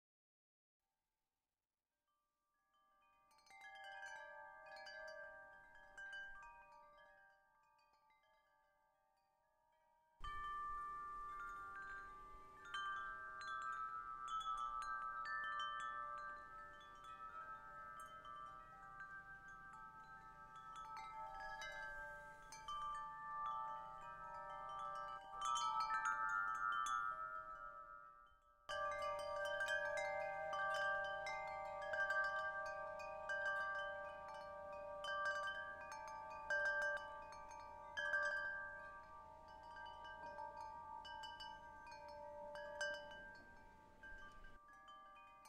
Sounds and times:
Wind chime: 0:02.5 - 0:45.4.

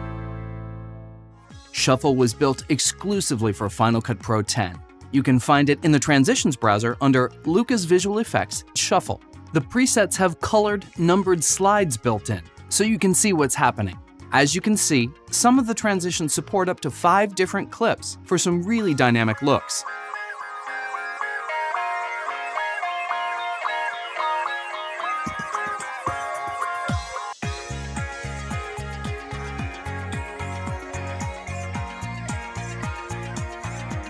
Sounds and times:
Music: 0:00.0 - 0:34.1
Speech: 0:01.8 - 0:19.9.

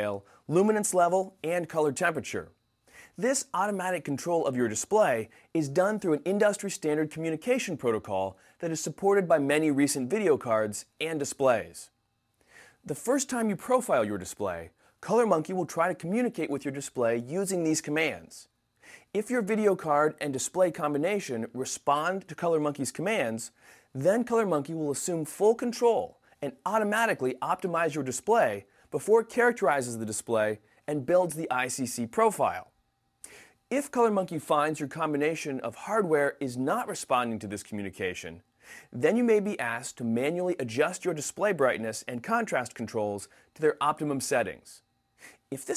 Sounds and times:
Speech: 0:00.0 - 0:02.5, 0:03.2 - 0:11.9, 0:12.8 - 0:18.5, 0:19.1 - 0:32.7, 0:33.7 - 0:44.8, 0:45.5 - 0:45.7.

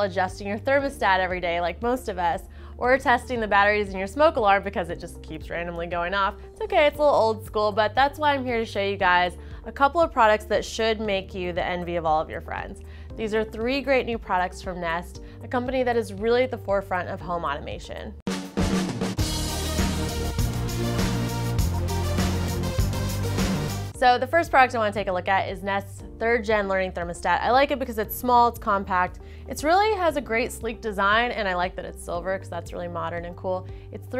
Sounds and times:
Speech: 0:00.0 - 0:18.2, 0:24.0 - 0:34.1
Music: 0:00.0 - 0:34.1.

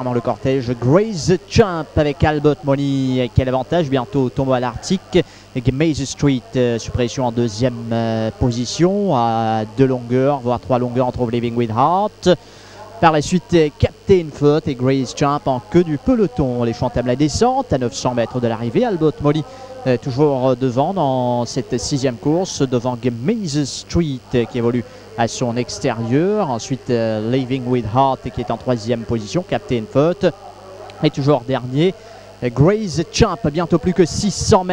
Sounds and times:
Speech: 0:00.0 - 0:34.7.

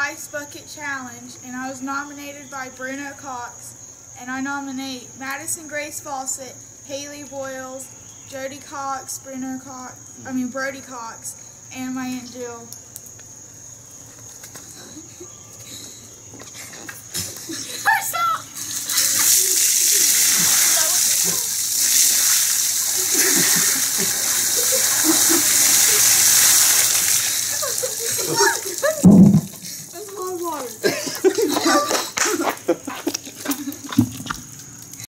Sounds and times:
Stream: 0:18.7 - 0:31.9
Speech: 0:30.0 - 0:30.8.

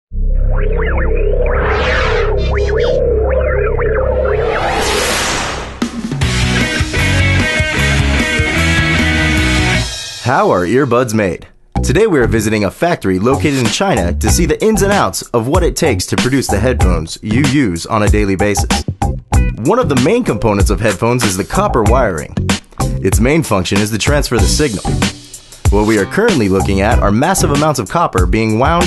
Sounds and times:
Music: 0:05.6 - 0:11.0, 0:11.8 - 0:12.5, 0:13.1 - 0:28.8.

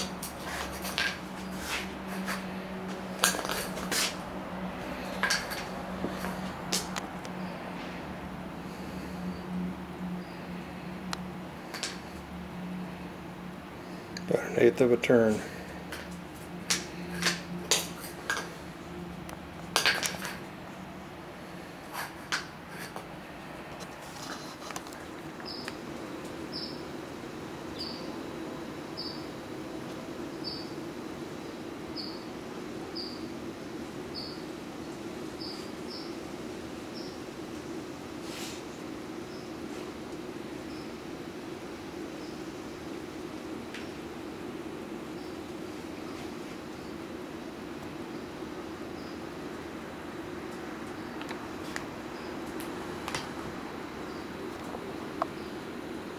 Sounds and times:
Speech: 0:14.2 - 0:15.6.

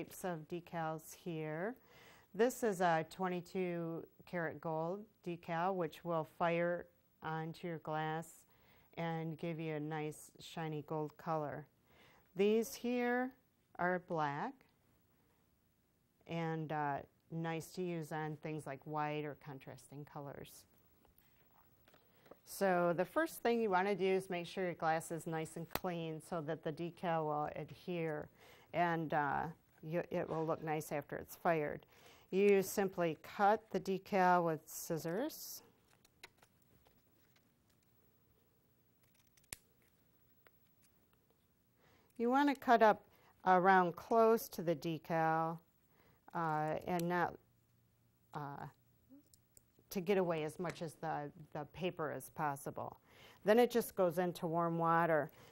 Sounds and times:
Speech: 0:00.0 - 0:01.8, 0:02.4 - 0:08.4, 0:09.0 - 0:11.7, 0:12.4 - 0:14.6, 0:16.2 - 0:20.7, 0:22.5 - 0:35.7, 0:42.2 - 0:45.6, 0:46.3 - 0:47.4, 0:48.4 - 0:48.8, 0:49.9 - 0:55.3.

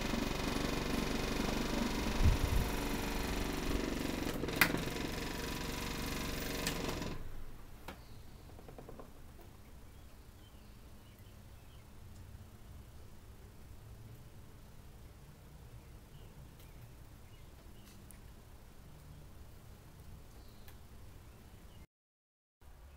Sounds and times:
Mechanical fan: 0:00.0 - 0:21.3.

